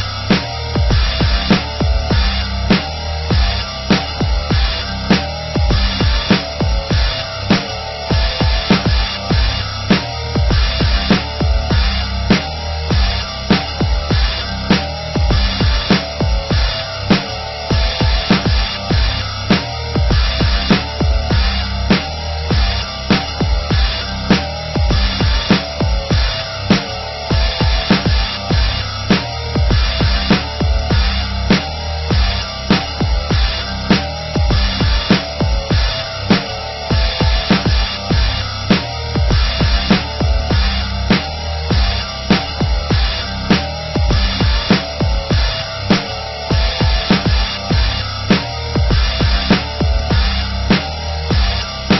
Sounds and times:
Music: 0.0s - 51.9s.

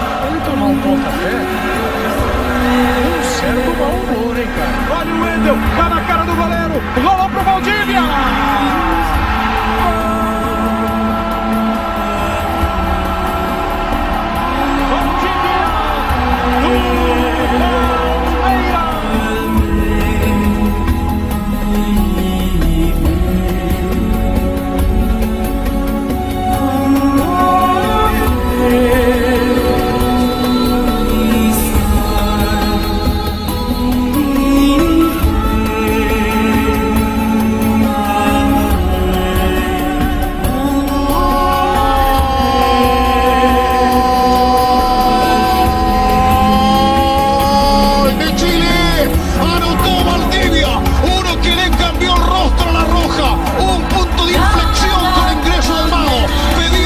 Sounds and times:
Mantra: 0.0s - 56.8s.

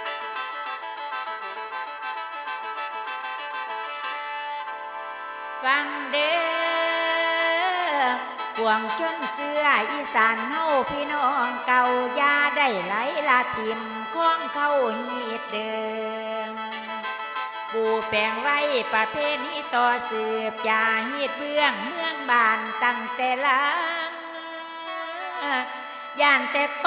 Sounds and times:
Music: 0.0s - 26.8s.

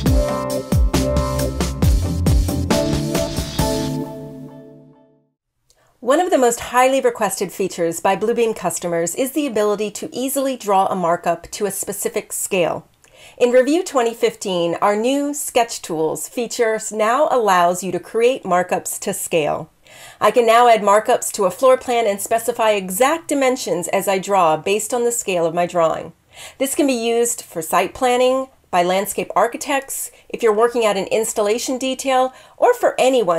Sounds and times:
Speech: 6.0s - 12.8s, 13.4s - 33.3s.

